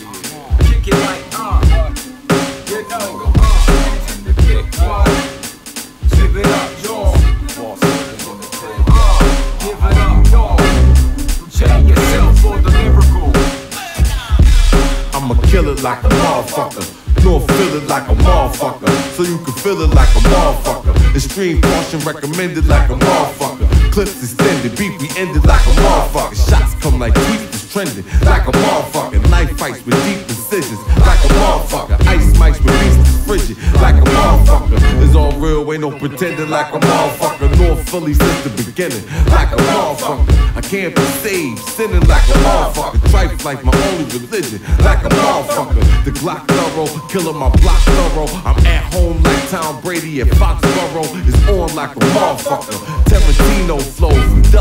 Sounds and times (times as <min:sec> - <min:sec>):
Funk: 0:00.0 - 0:35.7, 0:36.8 - 0:54.6.